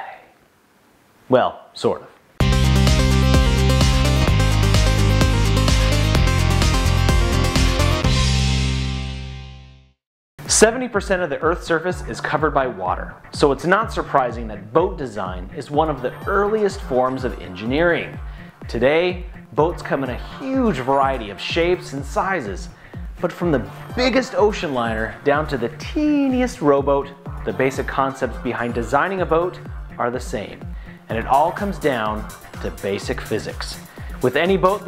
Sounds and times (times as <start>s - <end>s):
Speech: 0.0s - 0.3s, 1.3s - 2.2s, 10.5s - 34.8s
Music: 2.4s - 34.8s.